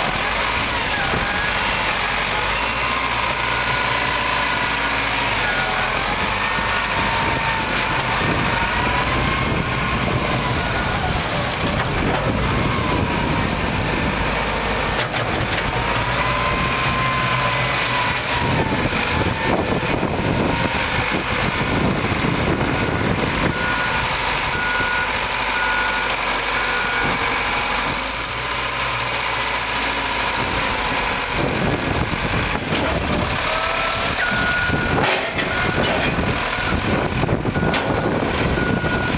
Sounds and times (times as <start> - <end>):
Heavy engine (low frequency): 0.0 - 39.1
Vehicle: 0.0 - 39.1.